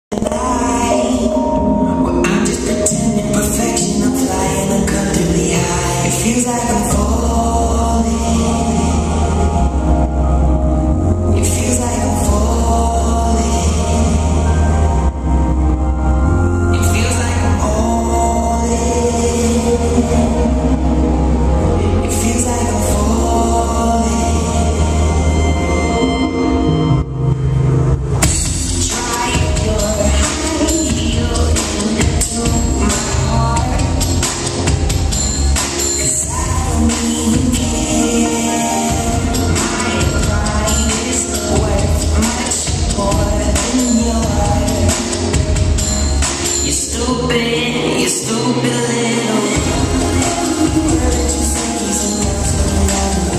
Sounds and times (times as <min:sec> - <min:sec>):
Inside, large room or hall: 0:00.0 - 0:53.3
Music: 0:00.0 - 0:53.3.